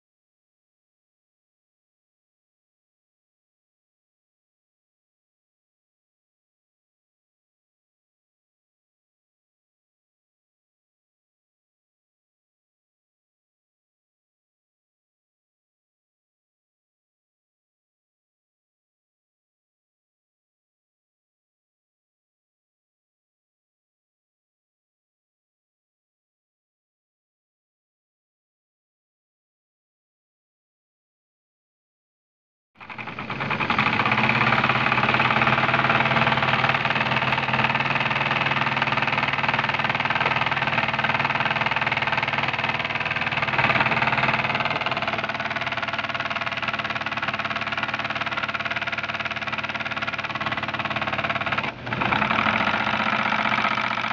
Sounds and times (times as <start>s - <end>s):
Heavy engine (low frequency): 32.8s - 54.1s.